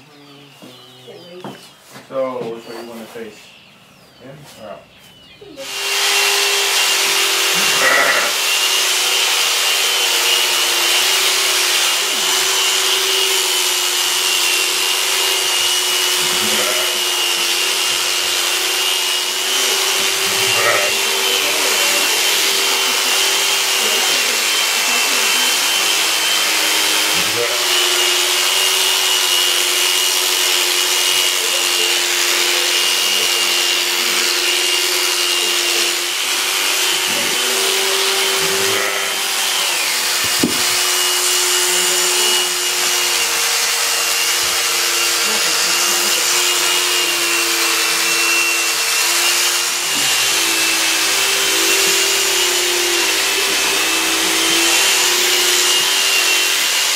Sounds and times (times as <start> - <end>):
Bleat: 7.6 - 8.4, 16.4 - 17.0, 20.5 - 21.0, 38.7 - 39.2.